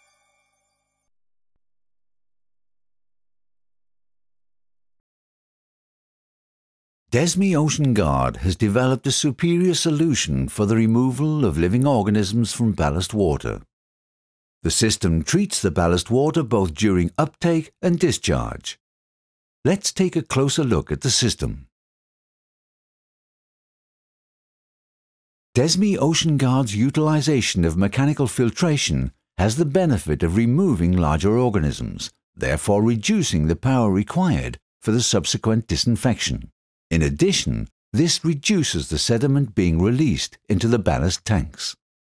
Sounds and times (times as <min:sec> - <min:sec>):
Speech: 0:07.1 - 0:13.7, 0:14.6 - 0:18.8, 0:19.7 - 0:21.7, 0:25.6 - 0:41.8.